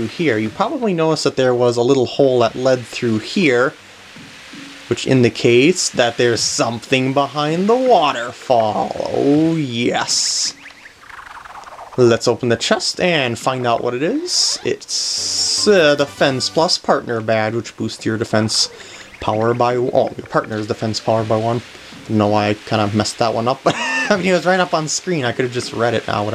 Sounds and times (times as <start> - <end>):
Speech: 0.0 - 3.8, 4.9 - 10.6, 12.0 - 26.3.